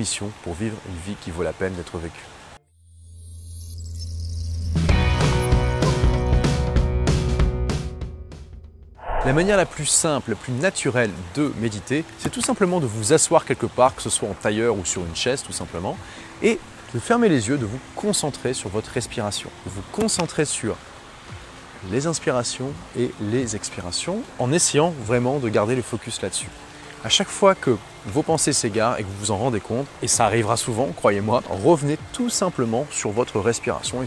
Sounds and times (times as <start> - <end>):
Speech: 0.0 - 2.3, 9.1 - 20.8, 21.8 - 34.0
Music: 4.5 - 34.0.